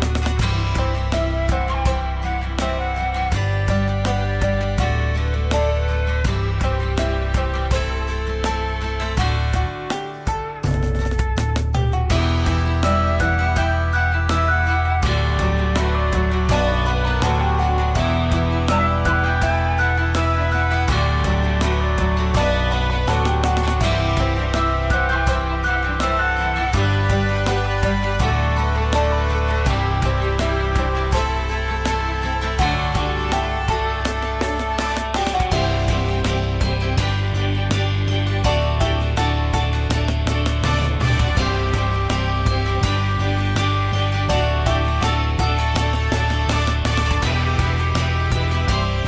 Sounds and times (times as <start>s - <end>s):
Music: 0.0s - 49.0s.